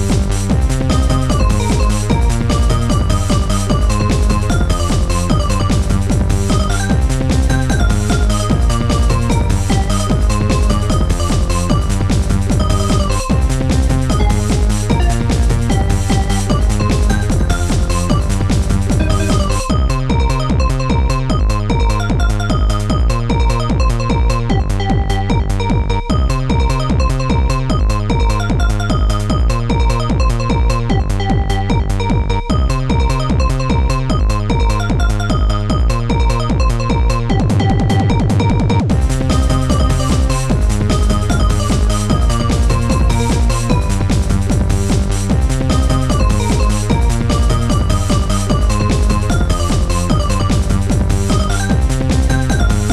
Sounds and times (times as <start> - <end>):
Music: 0.0 - 52.9.